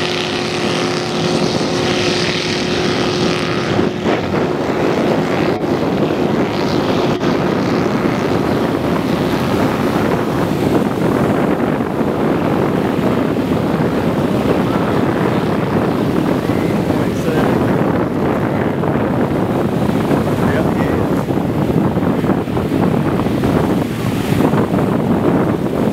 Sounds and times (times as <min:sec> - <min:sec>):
Speech: 0:17.0 - 0:17.6, 0:20.4 - 0:21.3.